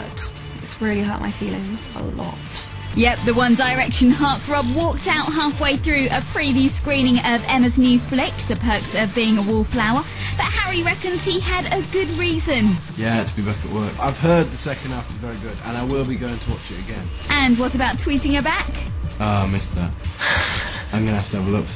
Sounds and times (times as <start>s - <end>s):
Music: 0.0s - 21.7s.